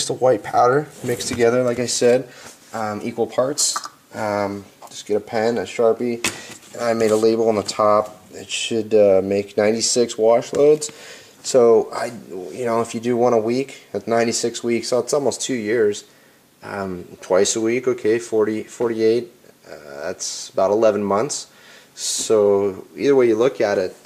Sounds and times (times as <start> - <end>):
Speech: 0.0 - 24.0.